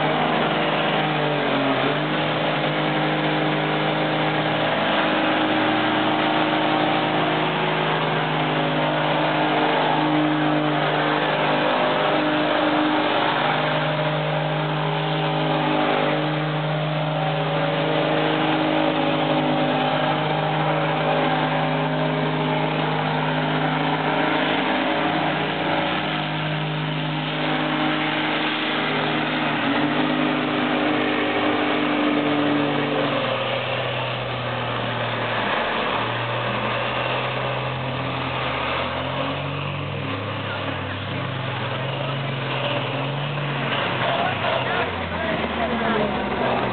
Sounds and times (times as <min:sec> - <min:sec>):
Truck: 0:00.0 - 0:46.7.